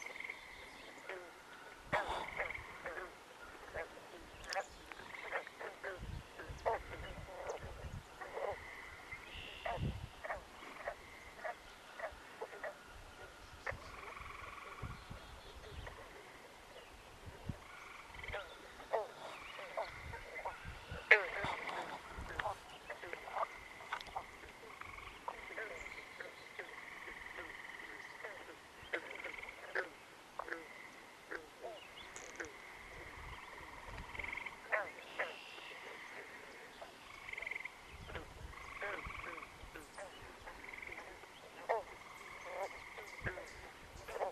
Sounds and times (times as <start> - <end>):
Frog: 0.0 - 44.3.